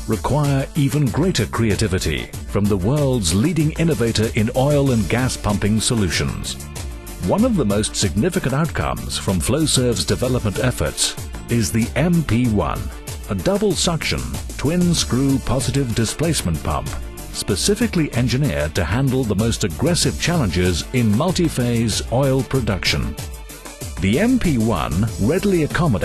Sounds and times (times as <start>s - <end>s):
Speech: 0.0s - 6.6s, 7.2s - 23.2s, 24.0s - 26.0s
Music: 0.0s - 26.0s.